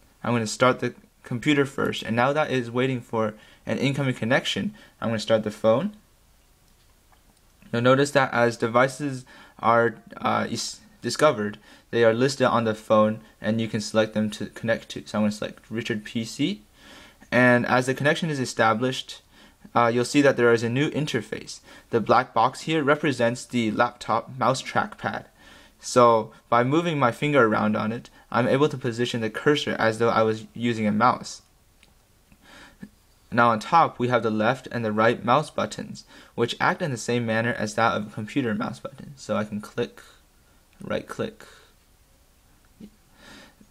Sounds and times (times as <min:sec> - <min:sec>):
Speech: 0:00.2 - 0:06.0, 0:07.6 - 0:16.7, 0:17.3 - 0:31.5, 0:33.3 - 0:40.2, 0:40.8 - 0:41.6.